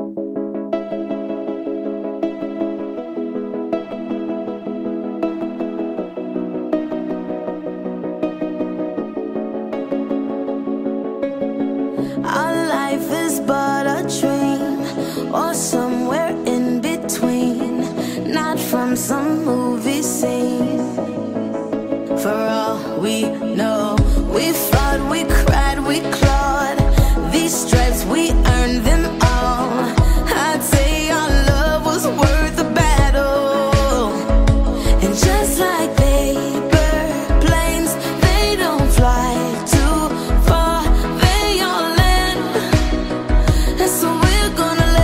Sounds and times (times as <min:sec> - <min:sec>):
House music: 0:00.0 - 0:45.0.